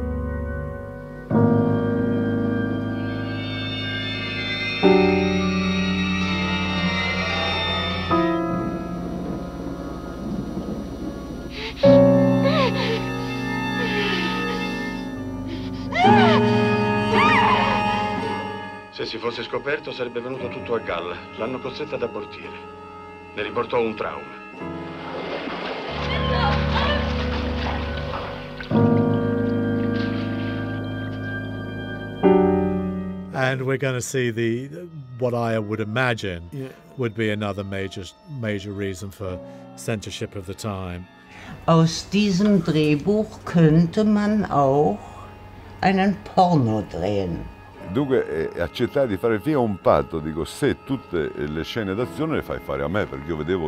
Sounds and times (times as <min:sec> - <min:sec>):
Music: 0:00.0 - 0:53.6
Speech: 0:33.4 - 0:41.0, 0:46.5 - 0:53.6.